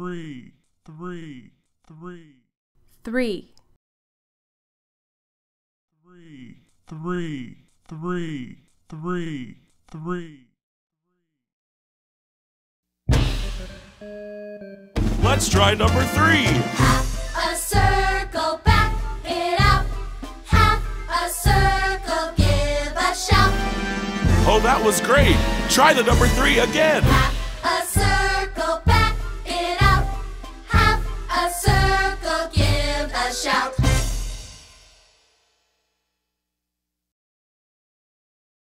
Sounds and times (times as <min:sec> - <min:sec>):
Music: 0:13.1 - 0:36.0.